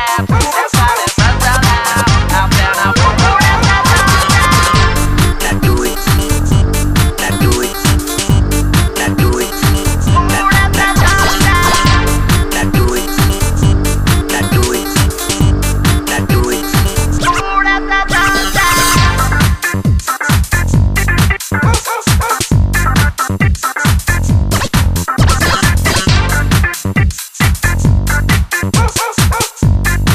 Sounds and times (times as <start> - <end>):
Disco: 0.0 - 30.1.